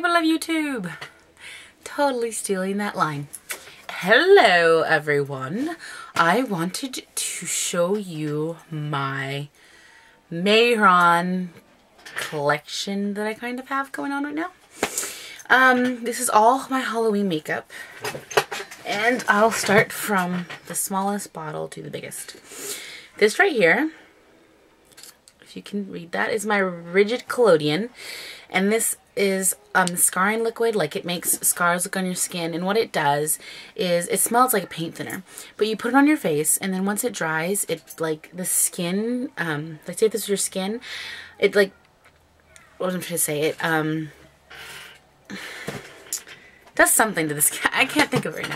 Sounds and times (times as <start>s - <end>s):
Speech: 0.0s - 1.0s, 1.8s - 3.3s, 3.9s - 9.5s, 10.3s - 11.6s, 12.2s - 14.5s, 15.4s - 17.6s, 18.8s - 22.3s, 23.2s - 24.0s, 25.5s - 27.9s, 28.5s - 40.8s, 41.4s - 41.7s, 42.8s - 44.2s, 46.8s - 48.5s.